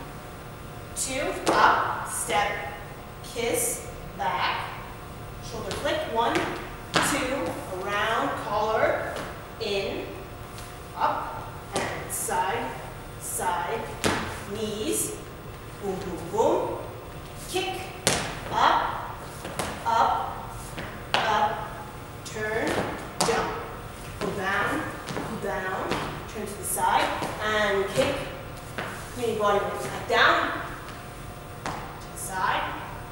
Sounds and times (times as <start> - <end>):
Speech: 1.0 - 4.8, 5.4 - 10.2, 11.0 - 15.2, 15.8 - 16.9, 17.5 - 19.0, 19.8 - 20.4, 21.2 - 28.4, 29.2 - 30.7, 32.2 - 32.9.